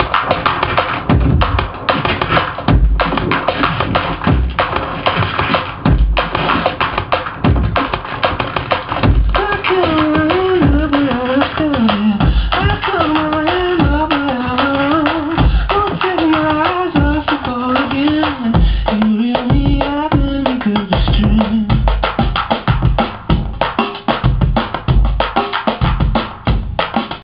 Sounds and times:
Music: 0.0s - 27.2s.

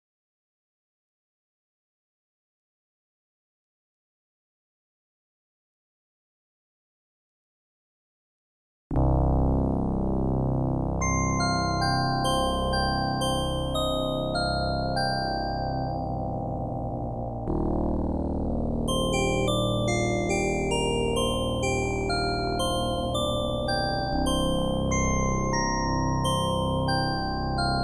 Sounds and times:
Music: 8.9s - 27.8s.

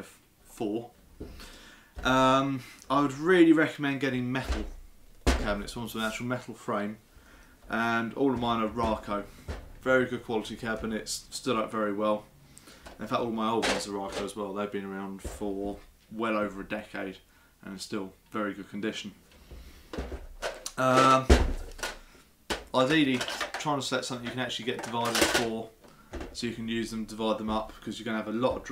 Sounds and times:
Speech: 0.0s - 1.0s, 2.0s - 4.7s, 5.4s - 7.0s, 7.7s - 12.3s, 13.0s - 19.2s, 20.7s - 21.3s, 22.7s - 25.8s, 26.4s - 28.7s.

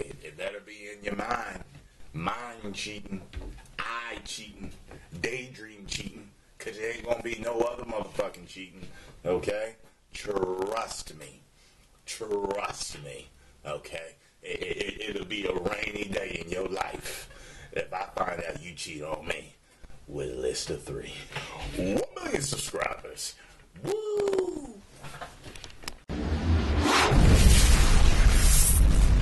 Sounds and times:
Speech: 0.0s - 11.4s, 12.1s - 24.8s
Inside, small room: 0.0s - 29.2s.

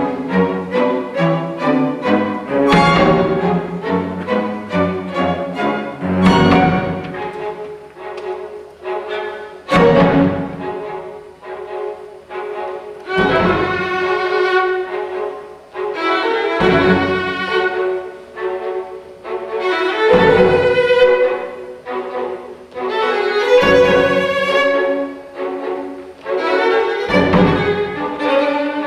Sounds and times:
Violin, fiddle: 0.0s - 28.8s.

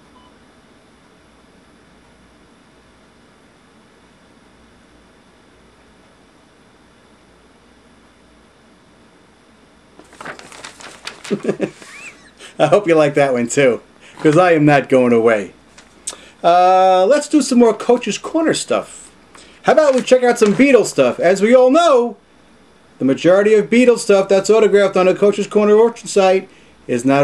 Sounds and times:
Speech: 12.6s - 15.6s, 16.4s - 22.2s, 23.0s - 27.2s.

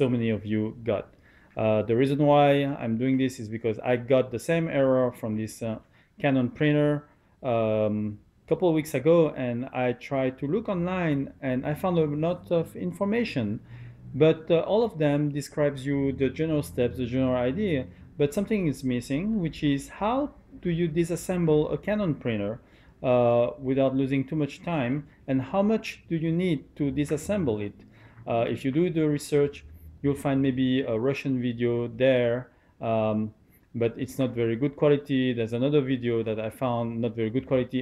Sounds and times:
Speech: 0.0s - 13.6s, 14.2s - 37.8s.

